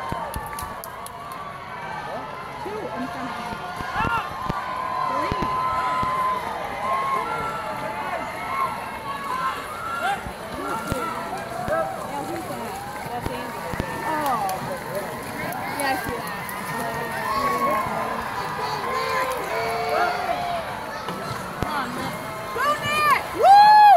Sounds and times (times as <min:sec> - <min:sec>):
Rowboat, canoe, kayak: 0:00.0 - 0:23.9
Speech: 0:07.0 - 0:23.3.